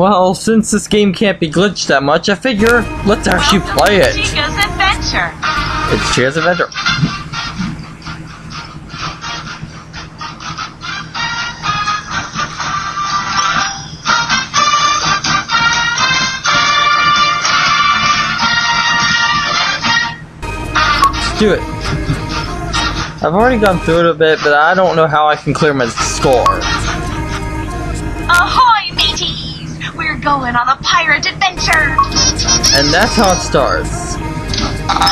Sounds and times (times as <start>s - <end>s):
Speech: 0.0s - 5.3s, 5.9s - 6.8s, 23.2s - 26.7s, 32.7s - 34.2s
Music: 2.5s - 35.1s.